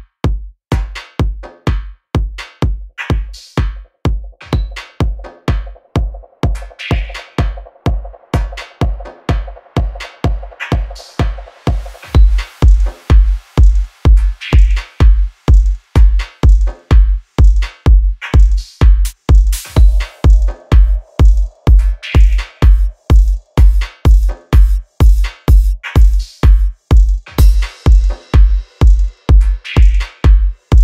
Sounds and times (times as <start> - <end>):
Music: 0.0 - 30.8.